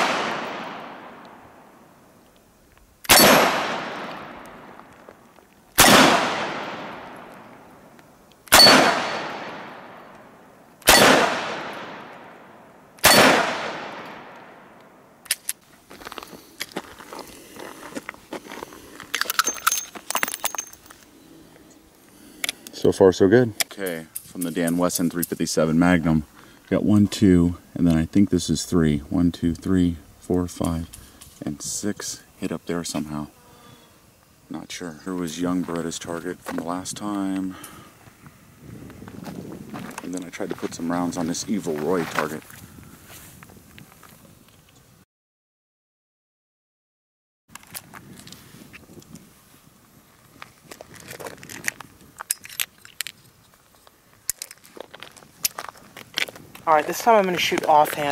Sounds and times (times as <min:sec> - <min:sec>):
Gunshot, gunfire: 0:00.0 - 0:01.1, 0:03.1 - 0:04.3, 0:05.8 - 0:07.0, 0:08.6 - 0:09.8, 0:10.9 - 0:12.0, 0:13.0 - 0:14.3.